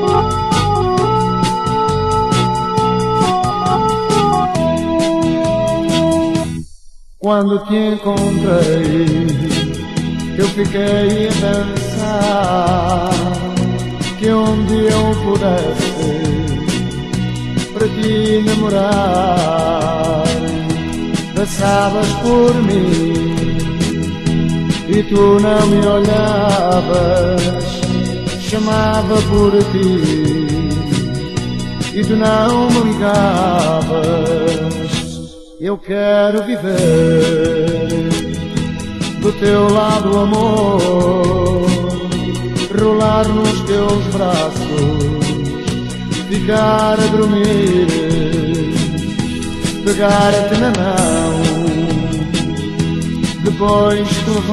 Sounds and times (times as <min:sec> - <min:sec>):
Music: 0:00.0 - 0:54.5.